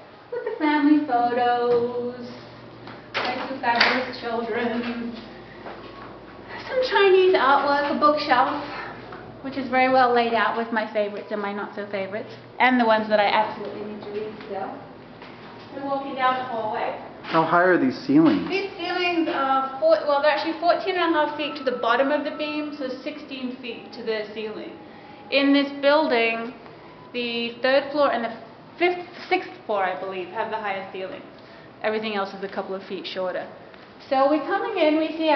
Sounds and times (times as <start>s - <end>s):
Conversation: 0.3s - 35.3s
Female speech, woman speaking: 0.4s - 2.5s, 3.2s - 5.3s, 6.5s - 14.9s, 15.7s - 17.1s, 18.5s - 35.3s.